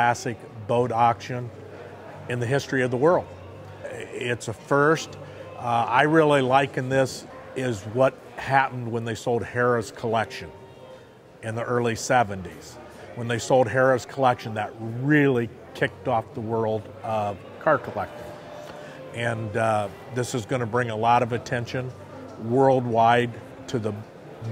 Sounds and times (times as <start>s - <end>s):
Speech: 0.0s - 1.5s, 2.3s - 10.6s, 11.4s - 18.2s, 19.1s - 24.5s
Music: 0.0s - 24.5s.